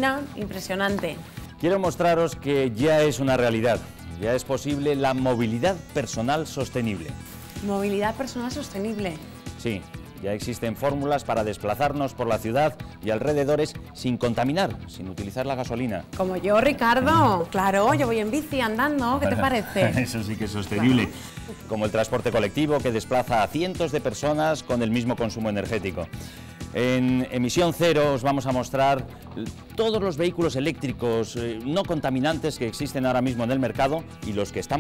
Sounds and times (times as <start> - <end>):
Music: 0.0 - 34.8
Speech: 14.0 - 21.1.